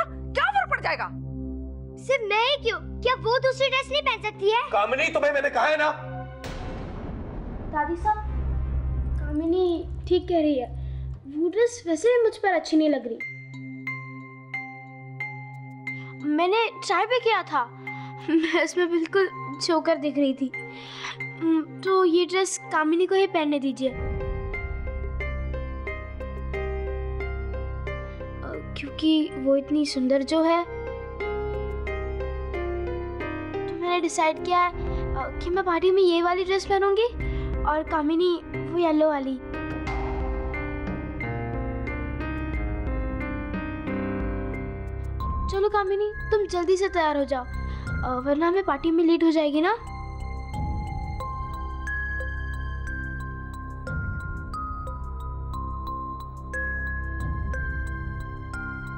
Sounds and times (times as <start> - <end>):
Glockenspiel: 13.1 - 23.0, 45.0 - 58.9.